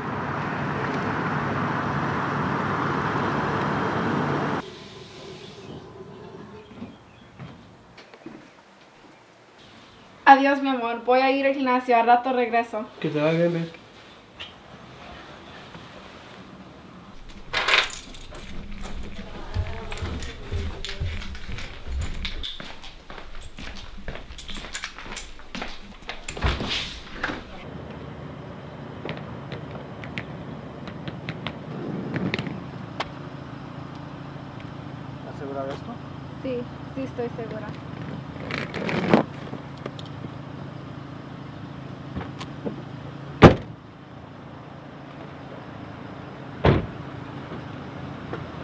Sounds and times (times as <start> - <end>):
Speech: 35.2 - 37.8.